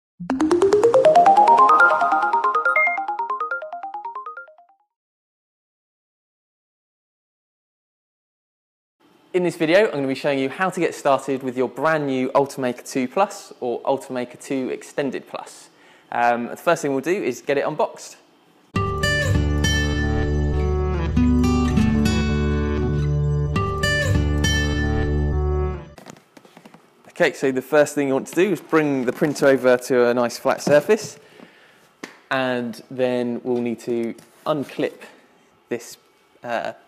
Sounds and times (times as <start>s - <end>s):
Ringtone: 0.2s - 4.9s
Speech: 9.3s - 18.2s, 27.1s - 31.2s, 32.3s - 36.8s.